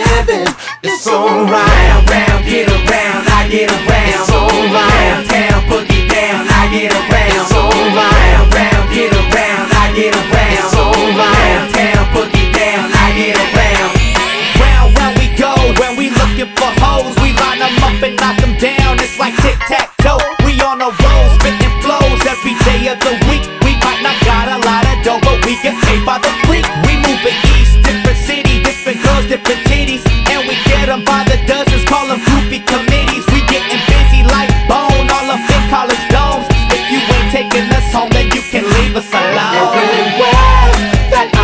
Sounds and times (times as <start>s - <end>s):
Music: 0.0s - 41.4s.